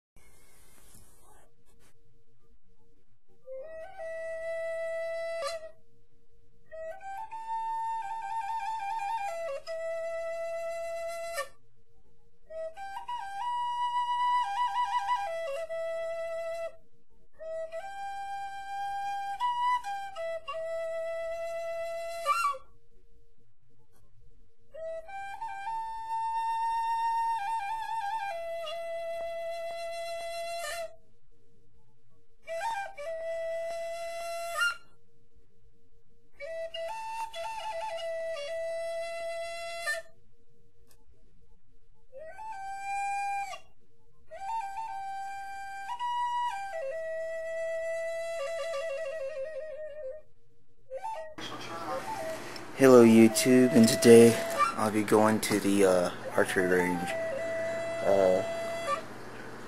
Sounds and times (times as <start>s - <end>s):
Flute: 3.4s - 5.9s, 6.7s - 11.7s, 12.4s - 22.8s, 24.7s - 31.1s, 32.4s - 35.0s, 36.4s - 40.2s, 42.0s - 59.6s.